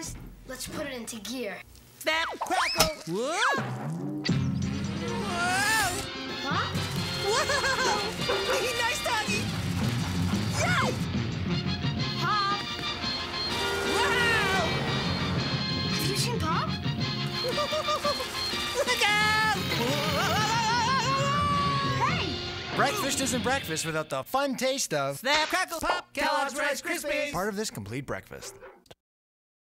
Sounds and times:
Music: 3.5 - 24.2
Speech: 22.8 - 28.5.

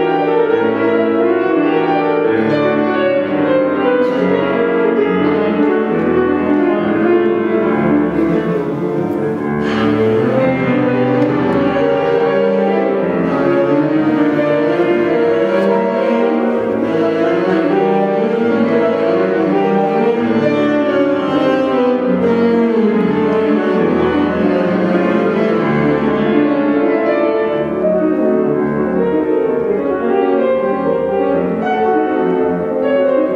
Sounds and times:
Violin, fiddle: 5.3 - 27.5.

